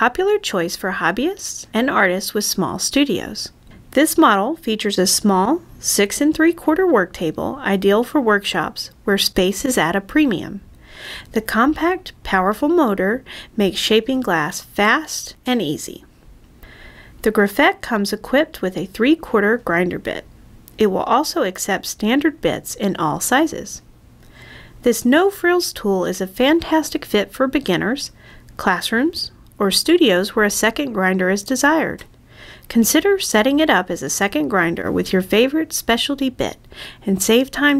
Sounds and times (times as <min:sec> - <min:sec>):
Speech: 0:00.0 - 0:10.6, 0:11.3 - 0:16.1, 0:17.2 - 0:23.8, 0:24.8 - 0:32.1, 0:32.7 - 0:37.7.